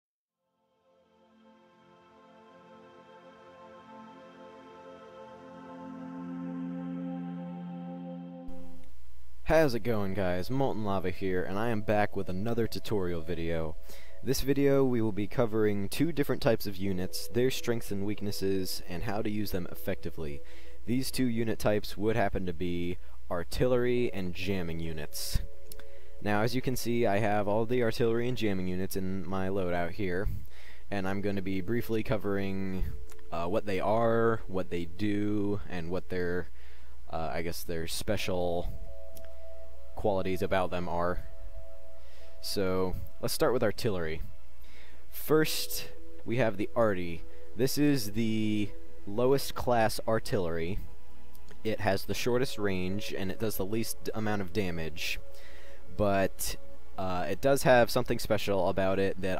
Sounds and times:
Music: 0.4s - 59.3s
Speech: 9.4s - 25.4s, 26.2s - 36.5s, 37.1s - 38.7s, 40.0s - 41.3s, 42.4s - 44.3s, 45.1s - 50.8s, 51.6s - 55.2s, 56.0s - 59.3s.

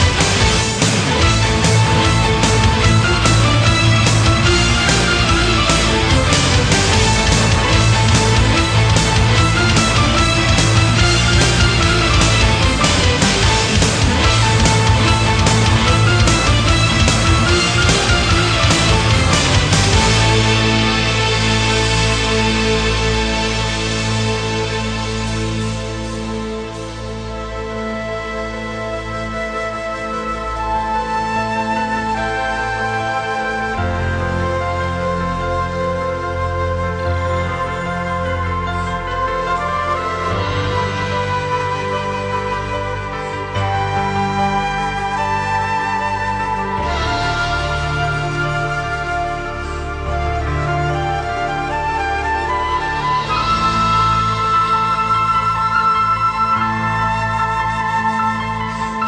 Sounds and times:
Music: 0.0s - 59.0s.

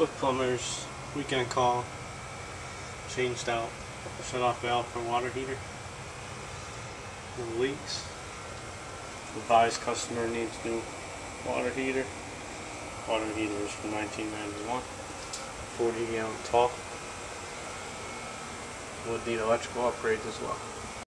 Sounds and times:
Speech: 0.0s - 1.9s, 3.1s - 5.6s, 7.4s - 8.2s, 9.3s - 12.2s, 13.0s - 14.9s, 15.8s - 16.8s, 19.0s - 20.7s.

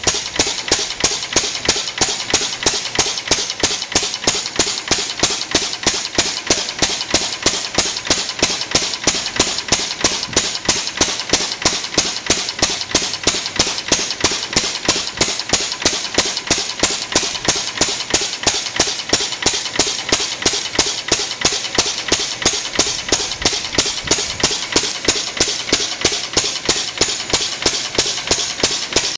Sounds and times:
Idling: 0.0s - 29.1s
Medium engine (mid frequency): 0.0s - 29.1s.

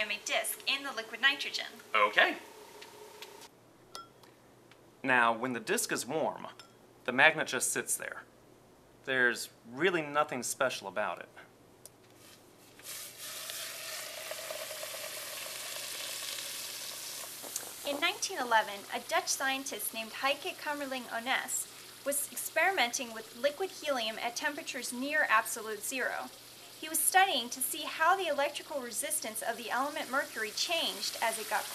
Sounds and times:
Speech: 0.0s - 2.4s, 5.1s - 8.3s, 17.9s - 31.7s.

